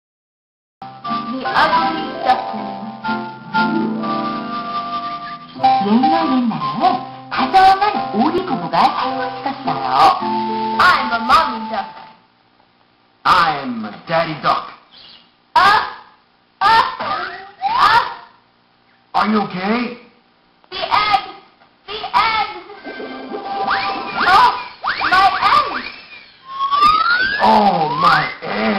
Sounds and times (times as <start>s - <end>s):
Music: 0.8s - 12.2s, 22.8s - 24.2s
Speech: 27.4s - 28.7s.